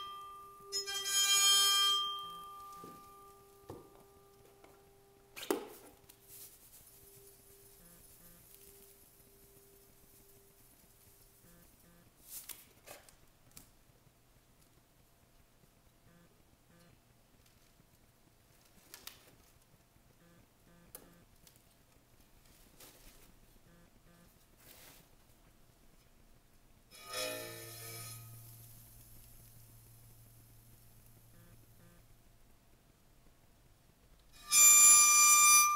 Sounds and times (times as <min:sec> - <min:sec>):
Inside, small room: 0:00.0 - 0:35.7.